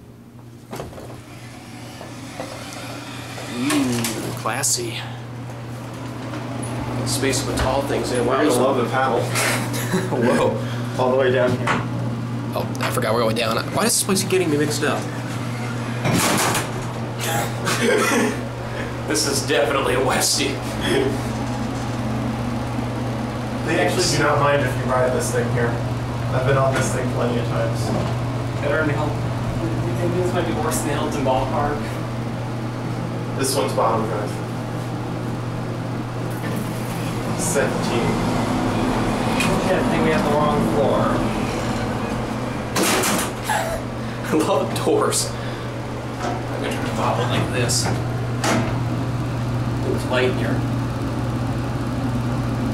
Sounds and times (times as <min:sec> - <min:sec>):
Speech: 0:07.1 - 0:09.4, 0:19.1 - 0:21.2, 0:23.6 - 0:28.0, 0:28.6 - 0:32.0, 0:33.4 - 0:34.4, 0:37.4 - 0:38.2, 0:39.4 - 0:41.3, 0:44.3 - 0:45.4, 0:46.6 - 0:48.0, 0:49.8 - 0:50.6.